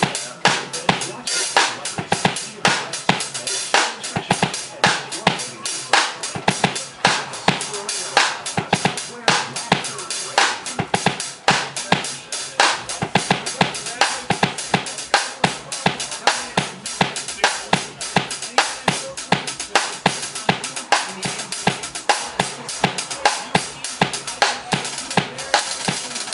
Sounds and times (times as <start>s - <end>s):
Bass drum: 0.0s - 26.1s
Drum kit: 0.0s - 26.3s
Hi-hat: 0.0s - 26.3s
Snare drum: 0.0s - 26.3s
Speech: 0.0s - 26.3s.